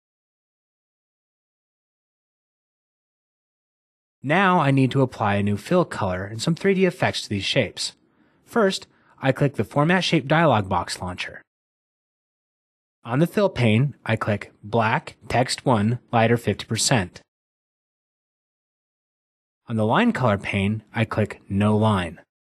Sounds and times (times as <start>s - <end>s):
Speech: 4.2s - 11.5s, 13.1s - 17.3s, 19.7s - 22.3s.